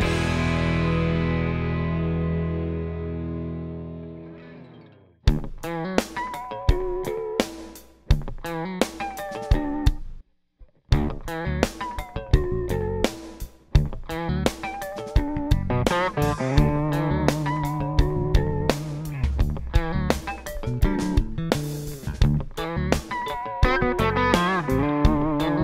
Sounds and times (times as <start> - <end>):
Music: 0.0 - 25.6.